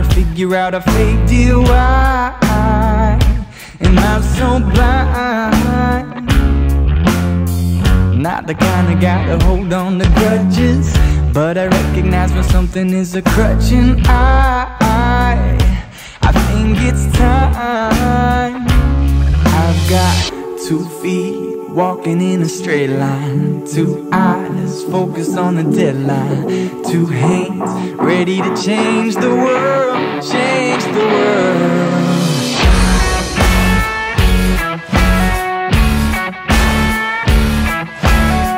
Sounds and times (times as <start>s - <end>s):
Blues: 0.0s - 38.5s
Soul music: 0.0s - 38.5s.